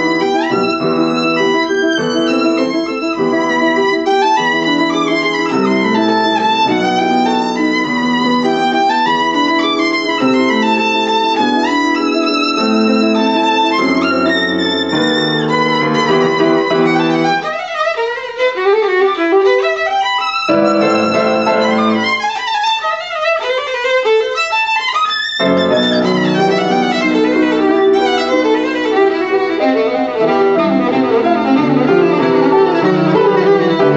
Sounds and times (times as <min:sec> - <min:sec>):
Violin, fiddle: 0:00.0 - 0:33.9.